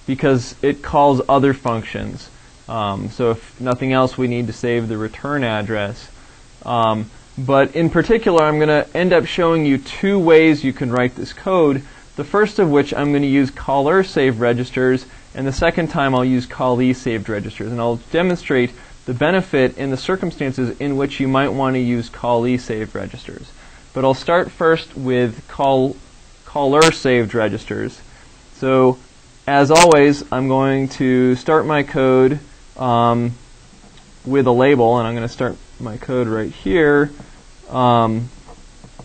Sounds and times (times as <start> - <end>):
Speech: 0.0 - 33.4, 34.3 - 38.4.